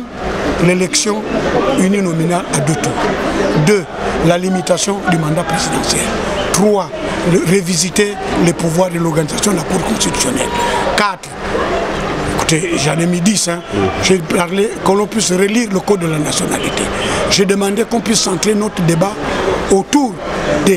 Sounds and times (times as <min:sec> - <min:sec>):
Speech: 0:00.0 - 0:11.4, 0:12.3 - 0:20.7.